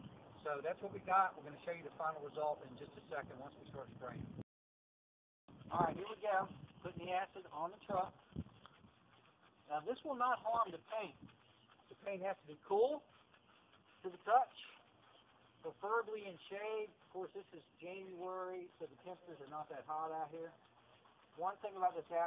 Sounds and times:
Speech: 0:00.4 - 0:04.4, 0:05.7 - 0:08.2, 0:09.6 - 0:11.2, 0:11.9 - 0:13.1, 0:14.0 - 0:14.8, 0:15.6 - 0:20.6, 0:21.3 - 0:22.2.

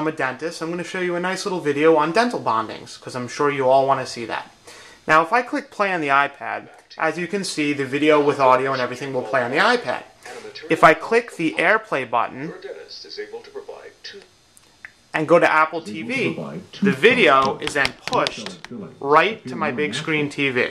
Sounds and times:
Speech: 0:00.0 - 0:04.5, 0:05.1 - 0:14.2, 0:15.2 - 0:20.7
Inside, small room: 0:00.0 - 0:20.7.

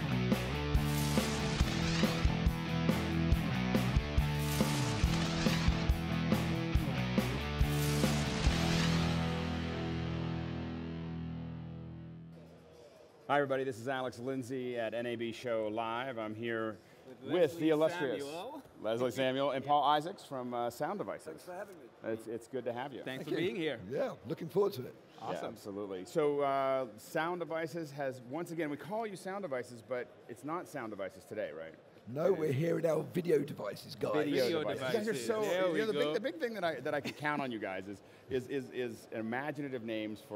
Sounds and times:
Speech: 0:13.3 - 0:40.3.

